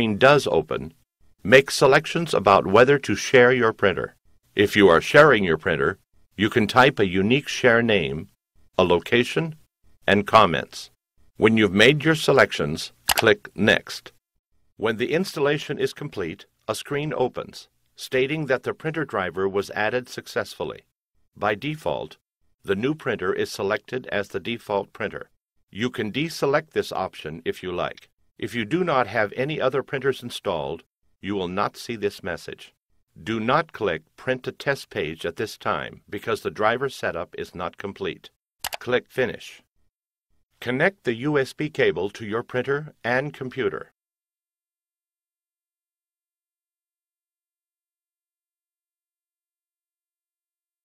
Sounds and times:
Speech: 0.0s - 14.2s, 14.8s - 39.7s, 40.6s - 44.0s.

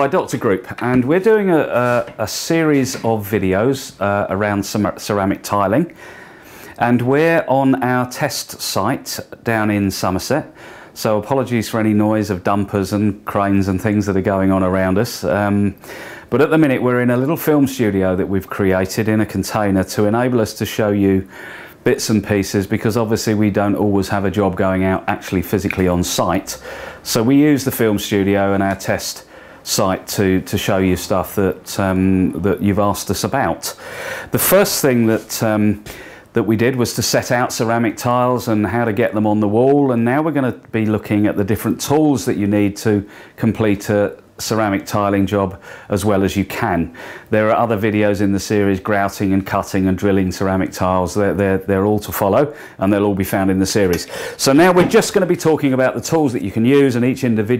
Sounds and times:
Speech: 0.0s - 6.0s, 6.8s - 57.5s.

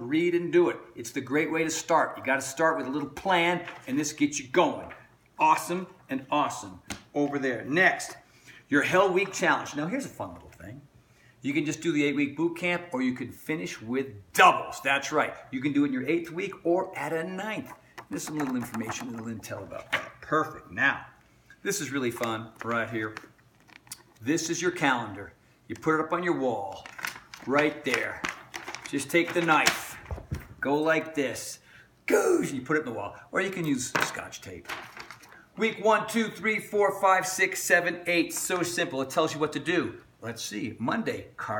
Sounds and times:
Speech: 0.0s - 23.3s, 24.2s - 28.3s, 28.9s - 30.0s, 30.6s - 34.7s, 35.6s - 41.5s
Inside, small room: 0.0s - 41.5s.

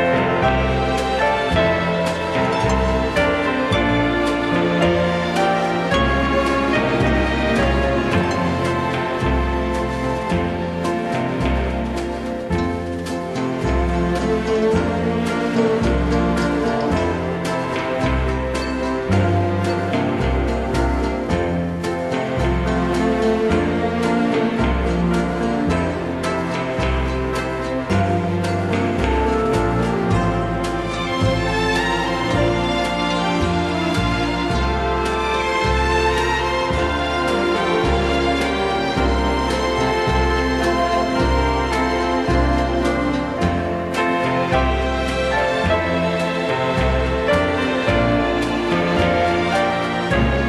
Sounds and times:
Music: 0.0s - 50.4s.

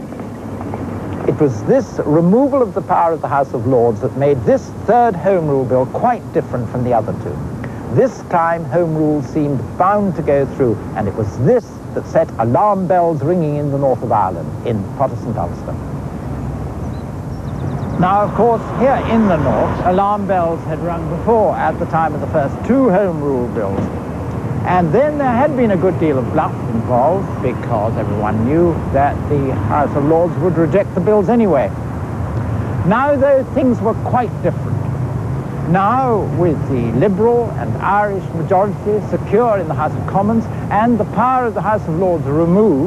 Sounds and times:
Outside, urban or manmade: 0.0s - 42.8s
Speech: 1.3s - 15.8s, 18.0s - 23.9s, 24.6s - 31.7s, 32.8s - 34.6s, 35.7s - 42.8s.

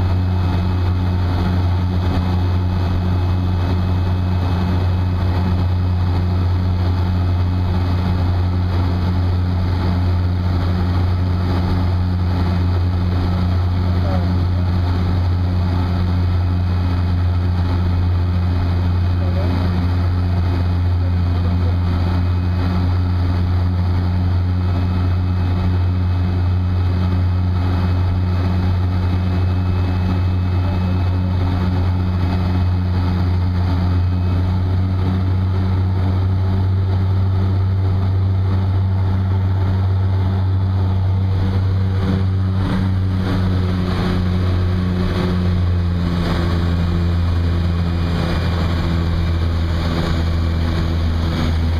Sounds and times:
Outside, rural or natural: 0.0s - 51.7s
Propeller, airscrew: 0.0s - 51.7s.

